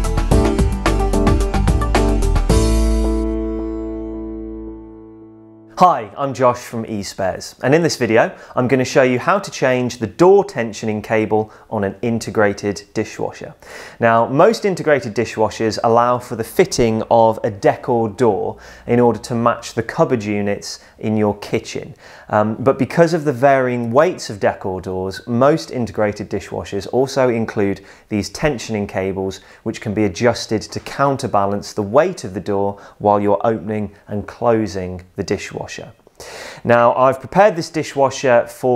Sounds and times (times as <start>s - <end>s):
Speech: 5.8s - 36.0s, 36.6s - 38.7s.